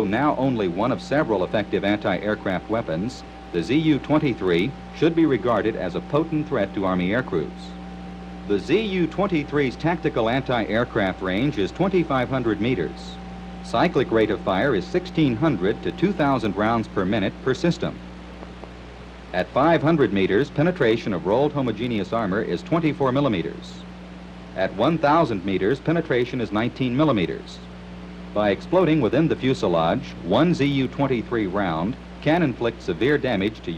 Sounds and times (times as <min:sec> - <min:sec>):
Speech: 0:00.0 - 0:07.8, 0:08.5 - 0:18.0, 0:19.4 - 0:23.9, 0:24.6 - 0:27.7, 0:28.4 - 0:33.7.